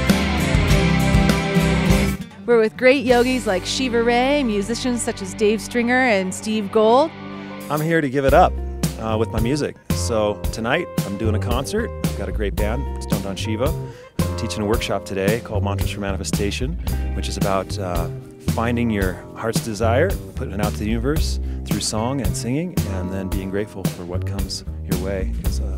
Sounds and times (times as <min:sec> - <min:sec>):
Music: 0:00.0 - 0:25.7
Speech: 0:02.5 - 0:07.1, 0:07.7 - 0:13.8, 0:14.4 - 0:25.7.